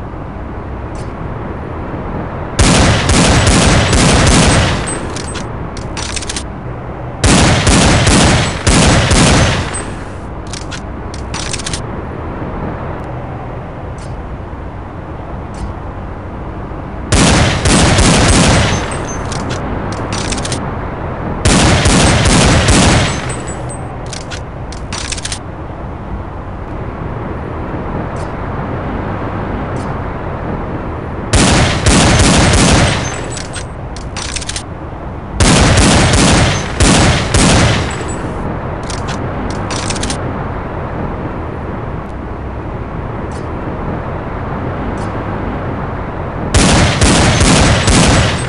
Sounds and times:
Outside, urban or manmade: 0.0s - 48.4s.

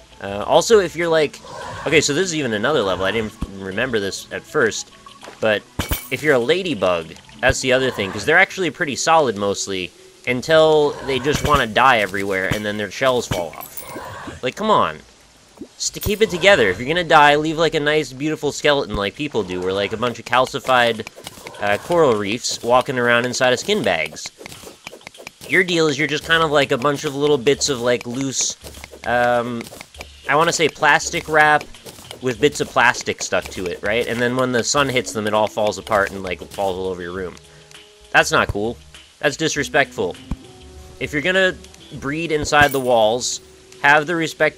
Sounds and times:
Speech: 0.2s - 4.8s, 5.4s - 13.7s, 14.4s - 15.0s, 15.8s - 21.0s, 21.6s - 24.3s, 25.5s - 29.6s, 30.3s - 31.6s, 32.2s - 37.4s, 38.2s - 40.2s, 41.0s - 44.5s.

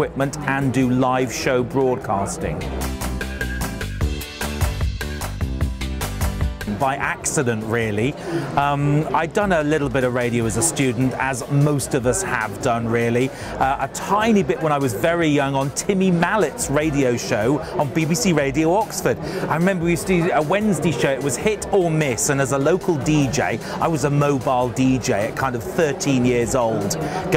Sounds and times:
Speech: 0.0s - 2.7s, 6.7s - 27.3s
Music: 0.0s - 27.3s.

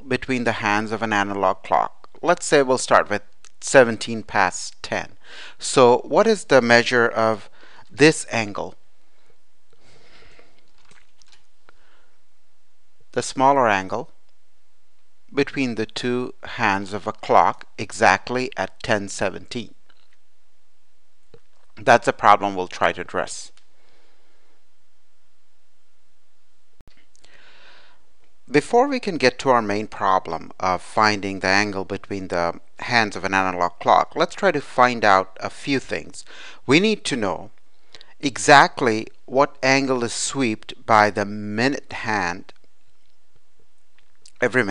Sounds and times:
Speech: 0.0s - 8.8s, 13.1s - 14.2s, 15.4s - 19.8s, 21.8s - 23.6s, 28.5s - 37.5s, 38.2s - 42.6s, 44.3s - 44.7s.

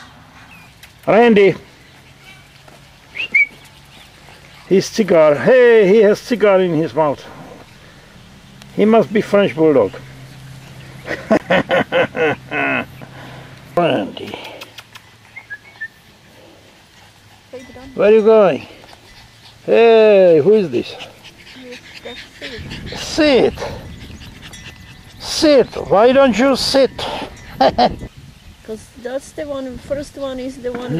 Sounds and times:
Outside, rural or natural: 0.0s - 30.9s.

